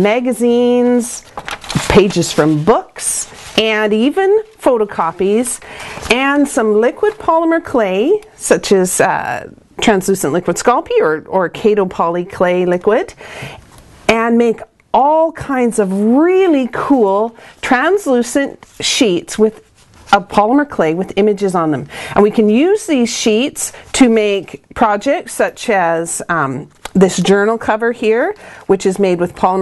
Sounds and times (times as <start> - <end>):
Speech: 0.0 - 1.2, 1.9 - 13.2, 14.1 - 29.6.